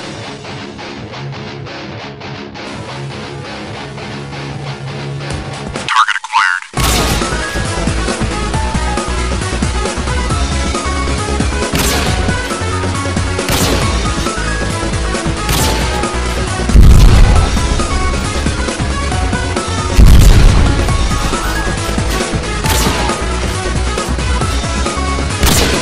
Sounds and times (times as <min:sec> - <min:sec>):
Music: 0:00.0 - 0:06.1, 0:06.7 - 0:25.8
Speech: 0:05.9 - 0:06.7.